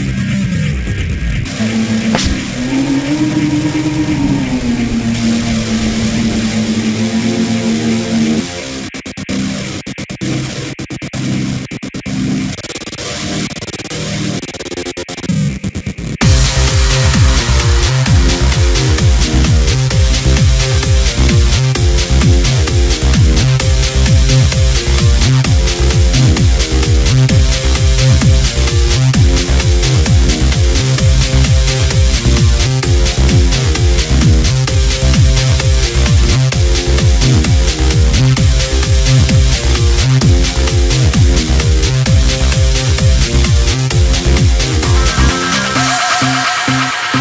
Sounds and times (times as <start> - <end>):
Trance music: 1.5 - 14.7, 16.2 - 47.2.